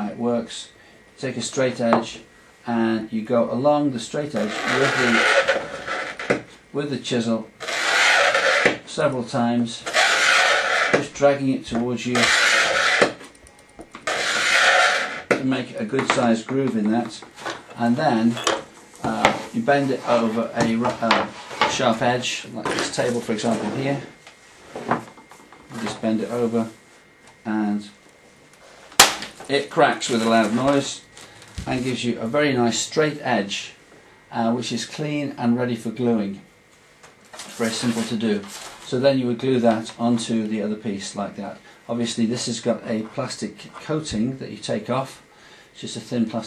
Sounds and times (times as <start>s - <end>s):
Speech: 0.0s - 5.4s, 6.7s - 7.5s, 8.9s - 9.8s, 11.0s - 12.3s, 15.4s - 24.2s, 25.7s - 26.8s, 27.4s - 28.0s, 29.5s - 36.5s, 37.5s - 45.2s, 45.8s - 46.4s
Inside, small room: 0.0s - 46.4s.